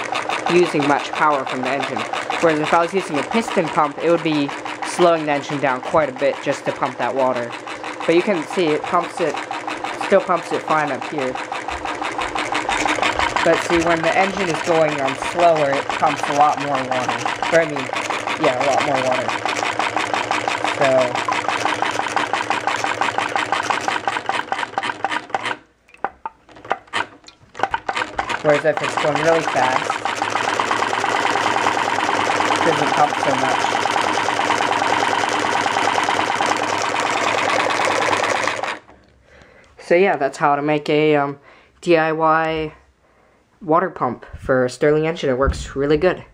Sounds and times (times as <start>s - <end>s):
Engine: 0.0s - 25.6s, 26.6s - 38.9s
Speech: 0.5s - 9.4s, 10.0s - 11.4s, 13.4s - 19.3s, 20.8s - 21.2s, 28.4s - 29.9s, 32.6s - 33.7s, 39.8s - 42.8s, 43.6s - 46.3s.